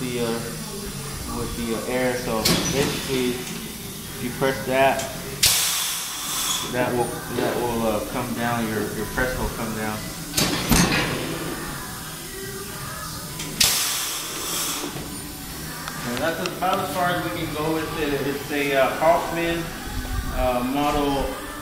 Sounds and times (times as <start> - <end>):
Hiss: 0.4 - 6.9, 13.6 - 15.3.